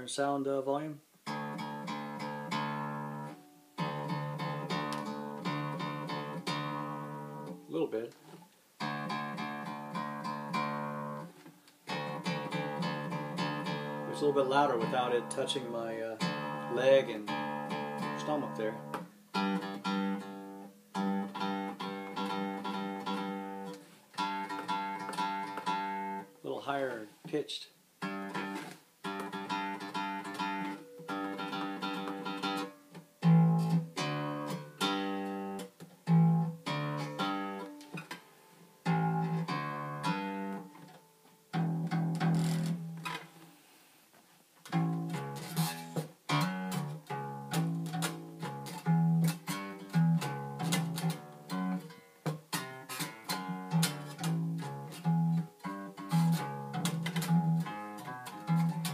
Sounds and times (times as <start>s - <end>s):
Strum: 0.0s - 58.9s
Bowed string instrument: 1.3s - 27.0s, 44.6s - 58.9s.